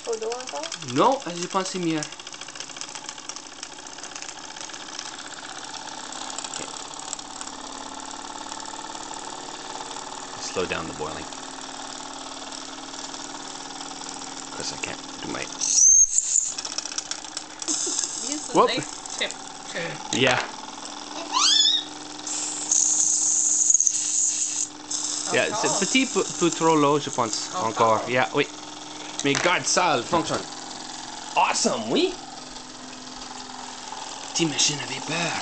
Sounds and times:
Engine: 0.0s - 35.4s
Speech: 25.3s - 28.5s.

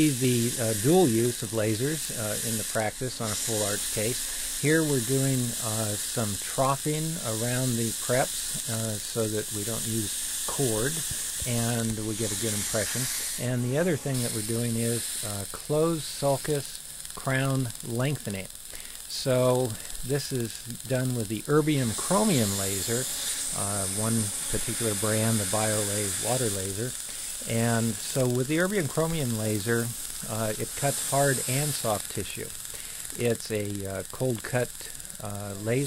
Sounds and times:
Speech: 0.0s - 18.5s, 19.1s - 32.5s, 33.2s - 35.8s.

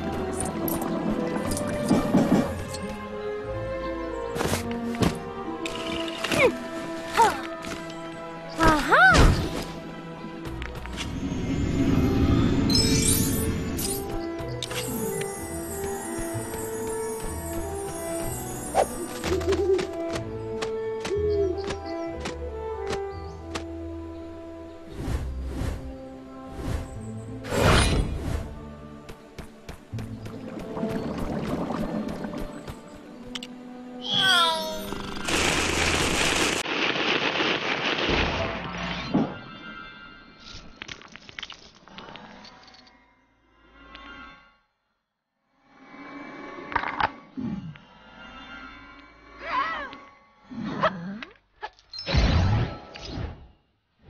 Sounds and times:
Music: 0.0s - 35.2s.

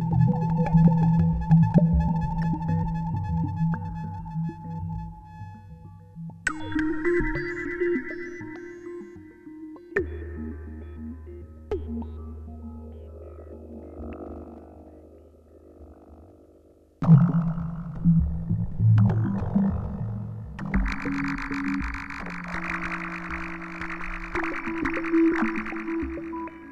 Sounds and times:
Music: 0.0s - 26.7s.

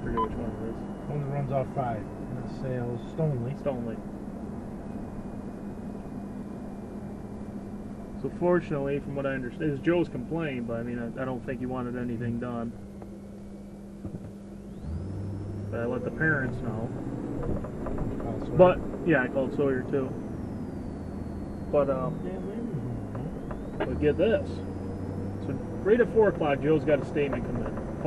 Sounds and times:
Speech: 0.0s - 4.0s, 8.2s - 12.7s, 15.8s - 17.0s, 18.2s - 20.2s, 21.8s - 22.9s, 23.8s - 24.6s, 25.4s - 27.8s
Car: 0.0s - 28.0s.

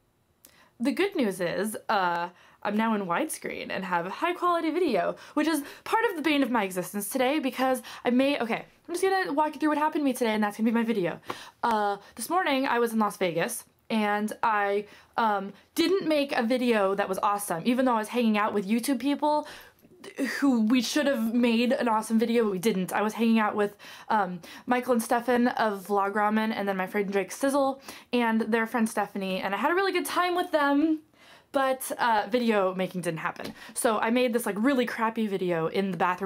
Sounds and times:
Speech: 0.8s - 19.4s, 20.0s - 36.2s.

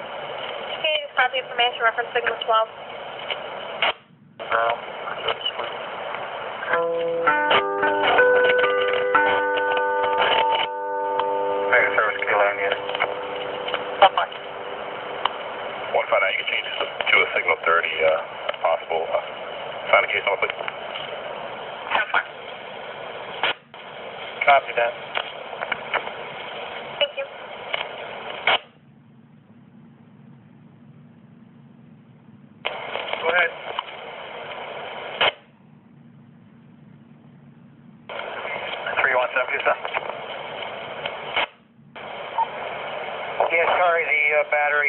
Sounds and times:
Speech: 15.9s - 19.3s, 19.9s - 20.6s, 43.4s - 44.8s.

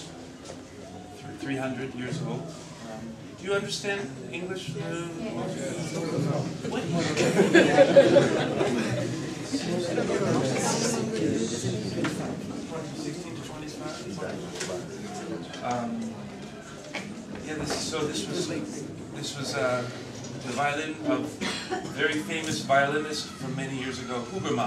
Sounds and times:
Speech: 1.2s - 16.3s, 17.3s - 24.6s.

